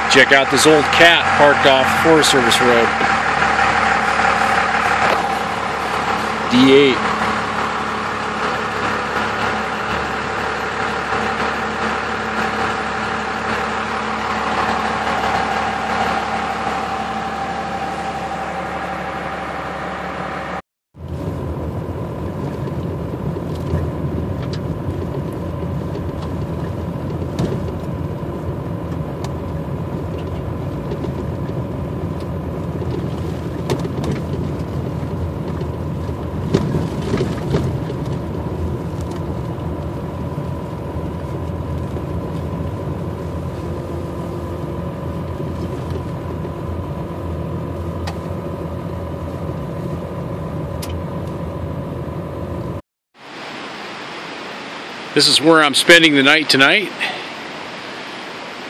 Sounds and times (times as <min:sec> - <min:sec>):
Speech: 0:00.0 - 0:03.1, 0:06.5 - 0:07.0, 0:55.2 - 0:57.2
Vehicle: 0:00.0 - 0:58.6.